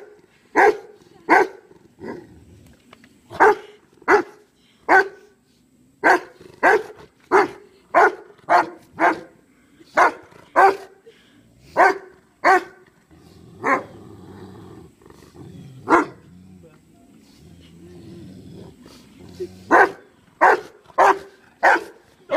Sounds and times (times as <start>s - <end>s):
Speech: 16.5s - 17.6s.